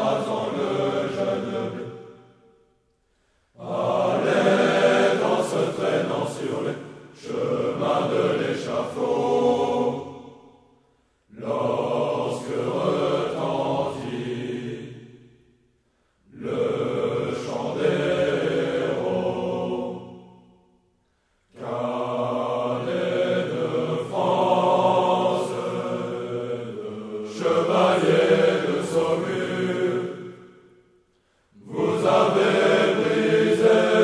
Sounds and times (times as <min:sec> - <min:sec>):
Mantra: 0:00.0 - 0:02.3, 0:03.6 - 0:10.3, 0:11.3 - 0:15.0, 0:16.3 - 0:20.4, 0:21.5 - 0:30.3, 0:31.6 - 0:34.0.